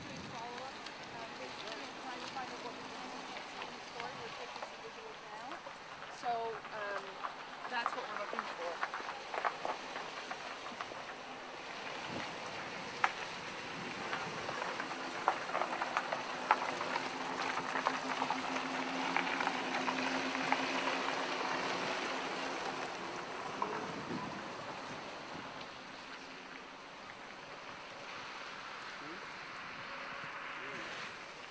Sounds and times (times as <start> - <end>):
Car: 0.0 - 31.5.